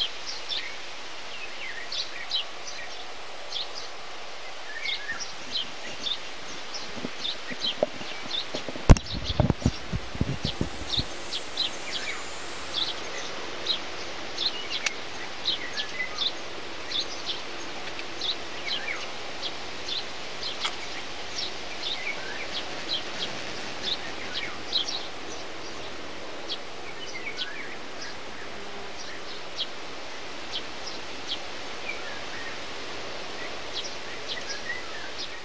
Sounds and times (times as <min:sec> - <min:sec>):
Bird: 0:00.0 - 0:35.4
Environmental noise: 0:00.0 - 0:35.4.